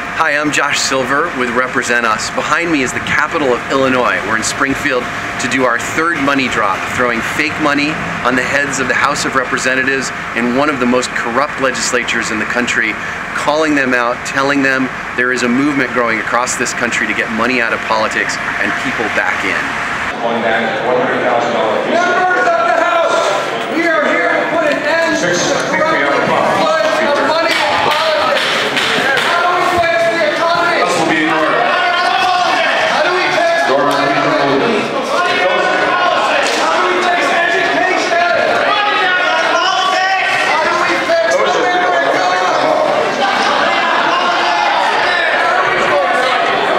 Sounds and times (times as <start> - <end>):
Speech: 0.2 - 46.7.